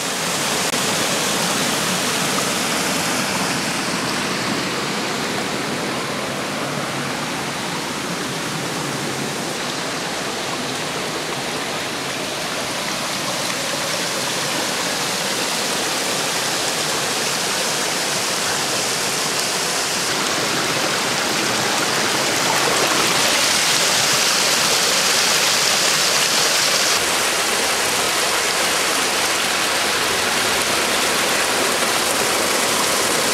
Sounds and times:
Stream: 0.0 - 33.3.

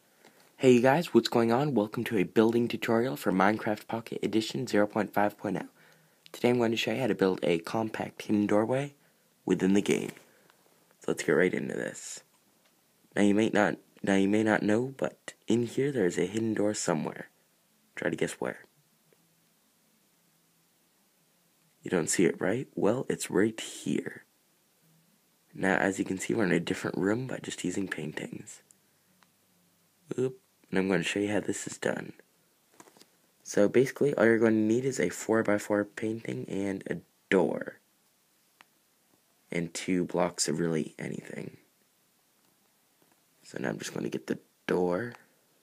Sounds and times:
Speech: 0.6 - 10.2, 11.0 - 12.3, 13.1 - 17.4, 18.0 - 18.7, 21.8 - 24.3, 25.5 - 28.7, 30.1 - 32.3, 33.4 - 37.8, 39.5 - 41.7, 43.4 - 45.3.

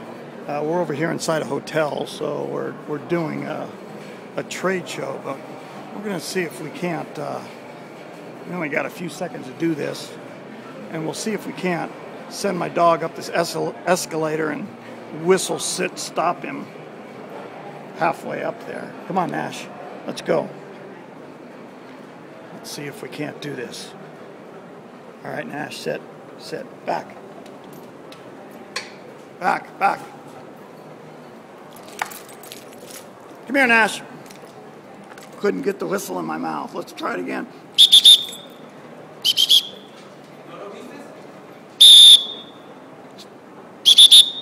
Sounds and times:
Speech: 0.5 - 3.7, 4.4 - 7.6, 8.5 - 10.2, 10.8 - 16.7, 18.0 - 20.6, 22.5 - 24.0, 25.2 - 27.2, 29.4 - 30.2, 33.5 - 34.1, 35.4 - 37.5, 40.5 - 41.3.

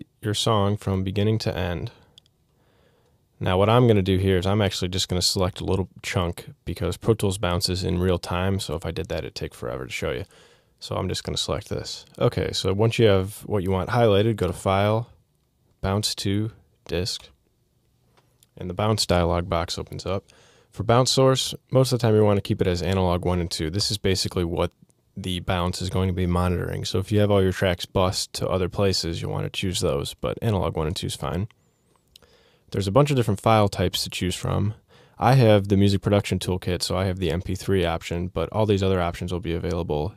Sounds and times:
Speech: 0.0 - 2.1, 3.4 - 15.2, 15.8 - 17.4, 18.4 - 31.5, 32.7 - 40.1.

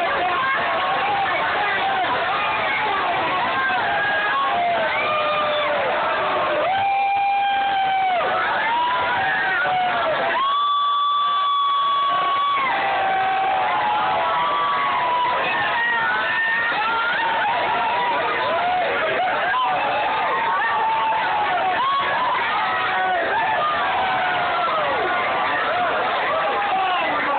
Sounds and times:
Cheering: 0.0 - 27.3
Crowd: 0.0 - 27.3.

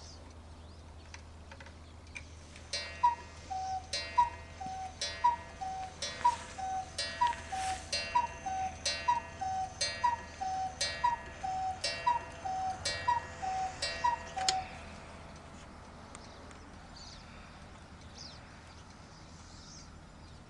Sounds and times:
Tick-tock: 2.7 - 14.7.

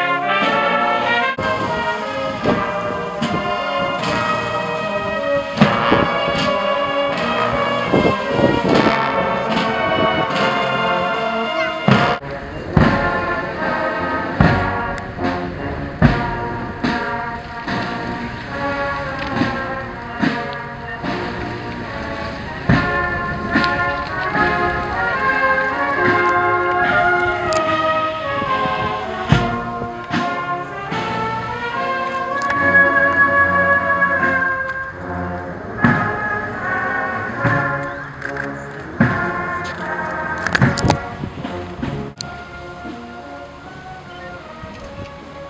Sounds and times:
Music: 0.0 - 45.5
Outside, urban or manmade: 0.0 - 45.5.

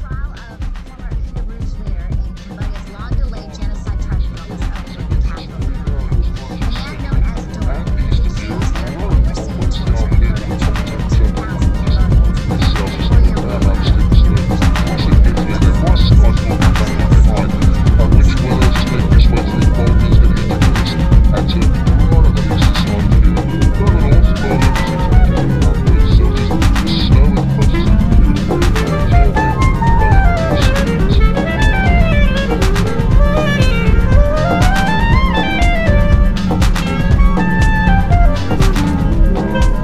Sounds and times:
Speech: 0.0 - 29.4, 30.1 - 35.7
House music: 0.0 - 39.8.

